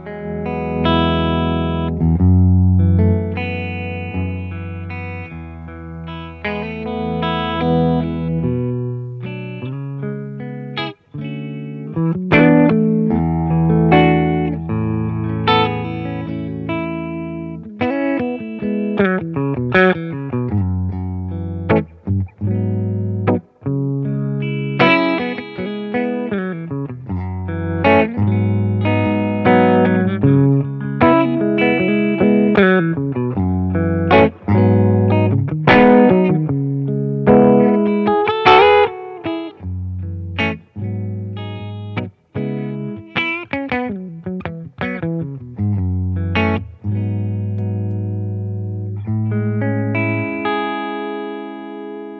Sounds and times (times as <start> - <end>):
Distortion: 0.0 - 52.1
Effects unit: 0.0 - 52.1
Guitar: 0.0 - 52.1.